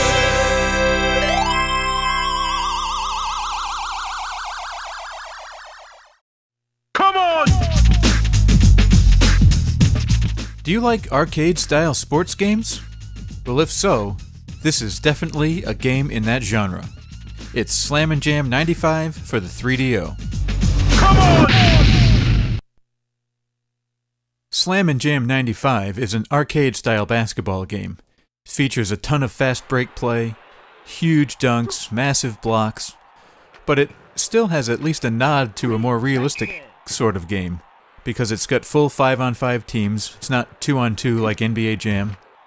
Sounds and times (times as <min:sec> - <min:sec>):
Speech: 0:07.0 - 0:08.0, 0:10.7 - 0:12.8, 0:13.5 - 0:16.9, 0:17.6 - 0:20.2, 0:21.0 - 0:22.0, 0:24.6 - 0:33.0, 0:33.7 - 0:42.2.